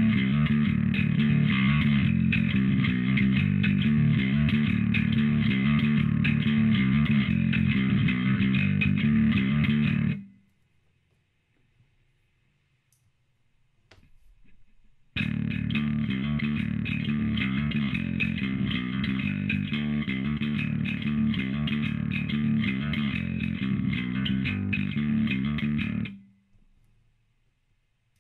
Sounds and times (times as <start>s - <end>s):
Music: 0.0s - 10.4s, 15.2s - 26.5s.